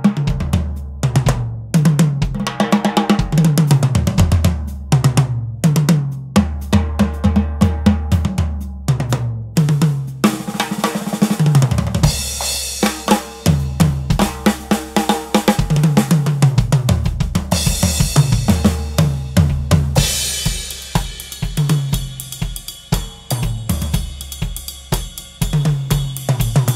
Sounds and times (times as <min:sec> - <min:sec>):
Bass drum: 0:00.0 - 0:26.7
Drum kit: 0:00.0 - 0:26.7
Drum roll: 0:00.0 - 0:26.7.